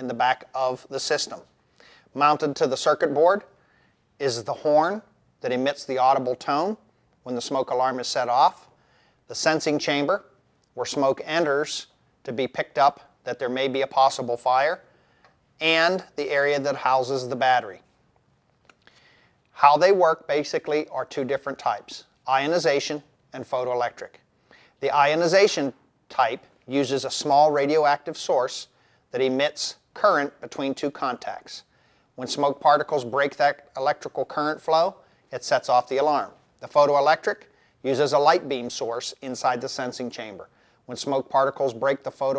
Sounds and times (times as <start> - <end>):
Speech: 0.0 - 1.5, 2.1 - 3.6, 4.2 - 8.7, 9.3 - 14.9, 15.6 - 17.9, 19.6 - 24.2, 24.8 - 42.3.